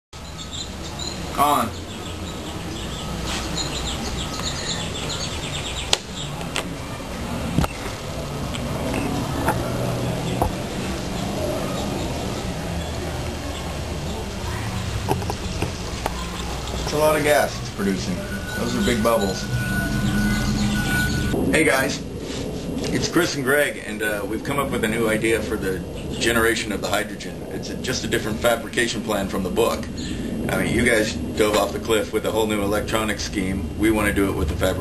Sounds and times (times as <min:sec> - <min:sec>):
Chirp, tweet: 0:00.2 - 0:06.4, 0:18.4 - 0:21.3.